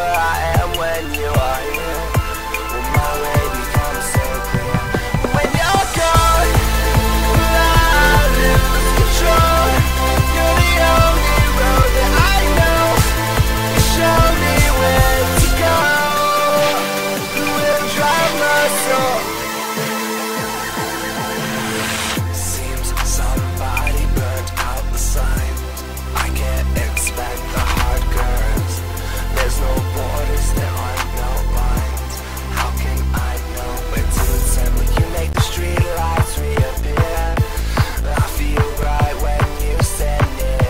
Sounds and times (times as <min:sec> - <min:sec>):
Music: 0:00.0 - 0:40.6.